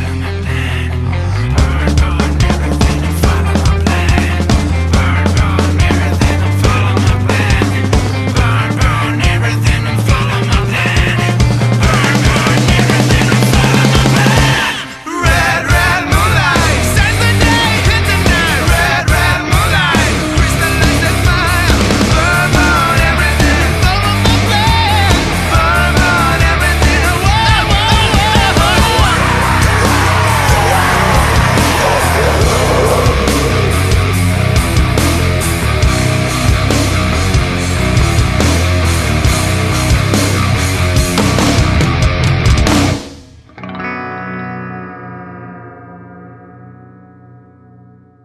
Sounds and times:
Music: 0.0 - 48.2
Effects unit: 32.9 - 48.2.

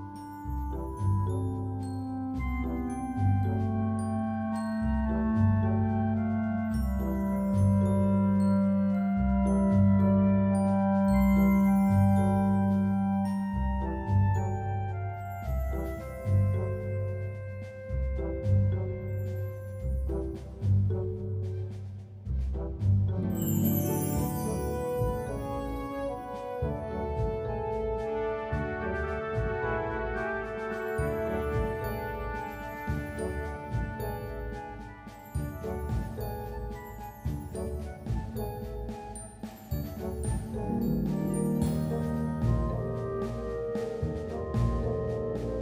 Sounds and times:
Marimba, xylophone: 0.0 - 22.0, 23.1 - 27.4, 30.7 - 45.6.

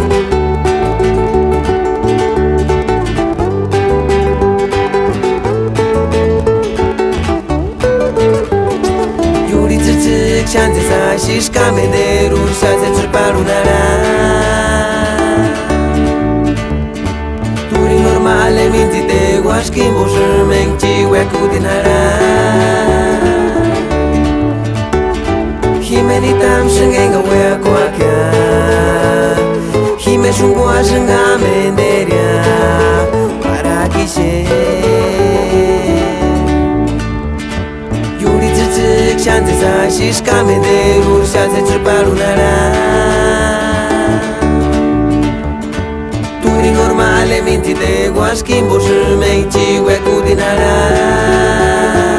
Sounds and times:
Traditional music: 0.0 - 52.1.

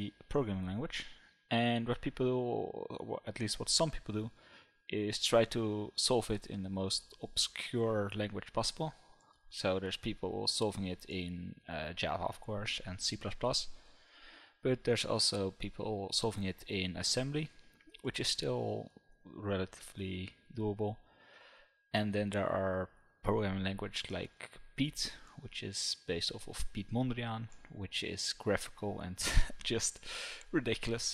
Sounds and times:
Speech: 0.0 - 13.8, 14.6 - 21.0, 22.0 - 31.1.

